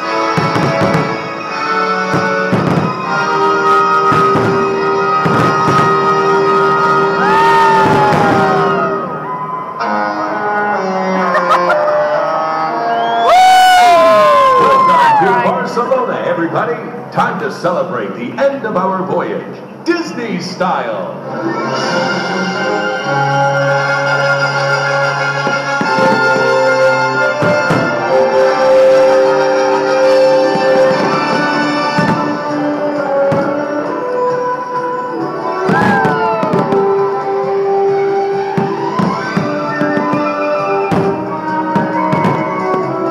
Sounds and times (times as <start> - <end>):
Fireworks: 0.0 - 9.0, 25.2 - 33.7, 35.6 - 37.2, 38.3 - 43.1
Music: 0.0 - 43.1
Crowd: 5.2 - 17.5, 35.0 - 43.1
Speech: 14.8 - 21.1.